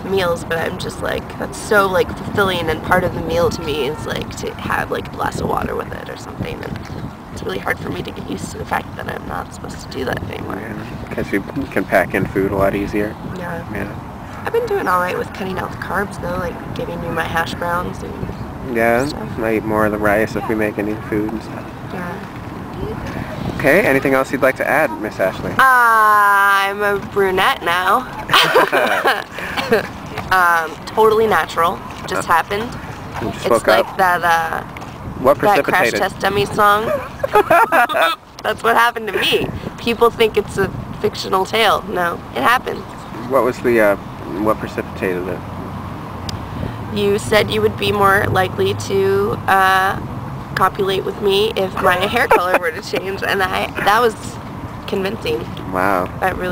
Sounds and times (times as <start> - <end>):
Speech: 0.0 - 6.7, 7.4 - 22.2, 23.6 - 28.1, 29.7 - 34.6, 35.2 - 37.0, 37.8 - 45.4, 47.0 - 50.0, 50.6 - 56.5.